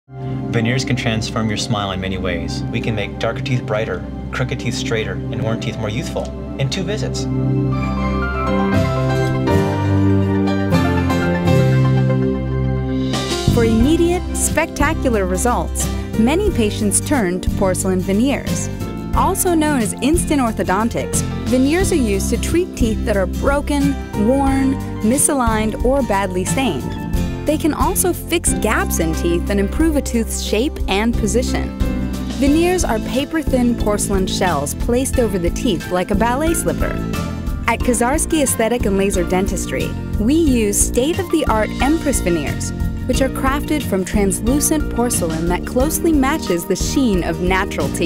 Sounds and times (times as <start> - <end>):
New-age music: 0.1 - 48.0
Speech: 0.6 - 7.3, 13.5 - 31.7, 32.4 - 37.0, 37.7 - 48.0.